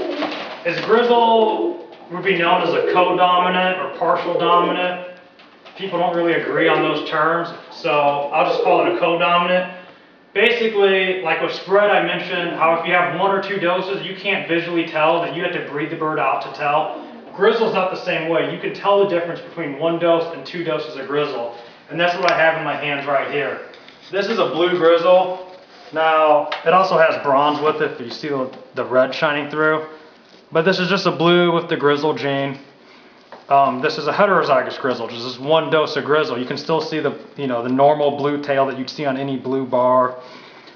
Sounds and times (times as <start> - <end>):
Coo: 0.0 - 0.6, 2.5 - 3.5, 8.4 - 9.0, 16.6 - 17.4.